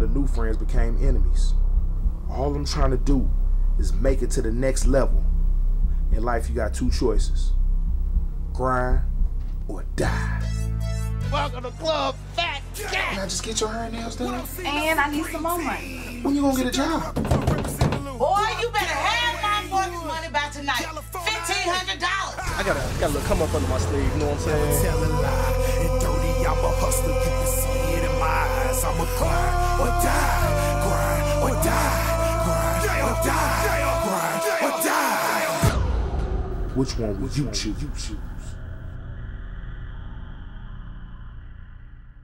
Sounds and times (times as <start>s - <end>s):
Speech: 0.0s - 1.6s, 2.3s - 5.2s, 6.2s - 7.5s, 8.6s - 9.0s, 18.2s - 25.0s, 36.8s - 38.4s
Music: 6.9s - 37.2s.